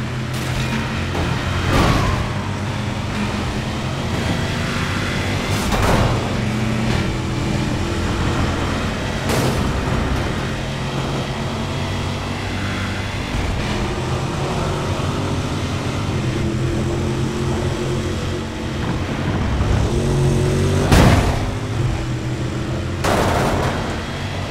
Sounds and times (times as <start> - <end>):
Car: 0.0 - 24.5.